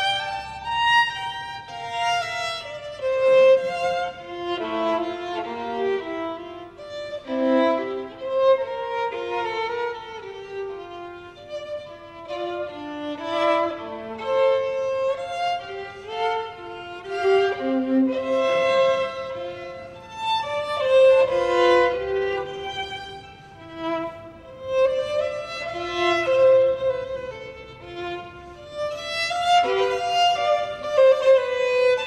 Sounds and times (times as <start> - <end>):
Violin, fiddle: 0.0 - 32.0.